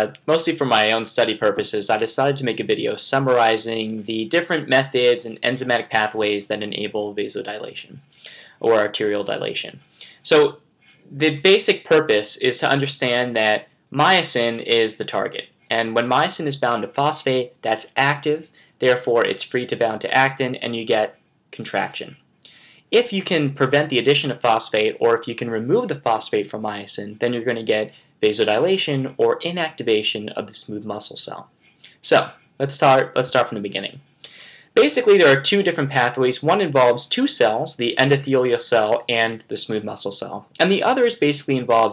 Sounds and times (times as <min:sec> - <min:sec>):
Speech: 0:00.0 - 0:22.2, 0:22.9 - 0:34.1, 0:34.8 - 0:41.9.